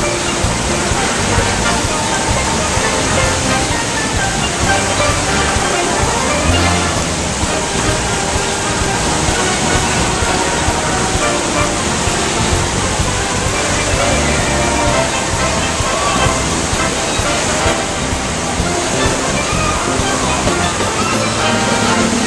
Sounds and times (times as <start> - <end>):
Music: 0.0 - 22.2
Stream: 0.0 - 22.2.